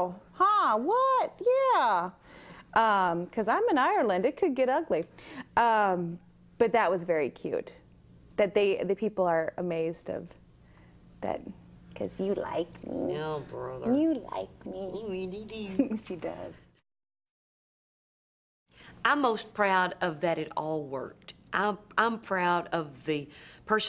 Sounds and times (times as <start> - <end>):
Female speech, woman speaking: 0.0 - 2.2, 2.8 - 7.8, 8.4 - 10.4, 11.2 - 16.7, 19.0 - 23.8
Conversation: 0.0 - 16.8, 18.8 - 23.8.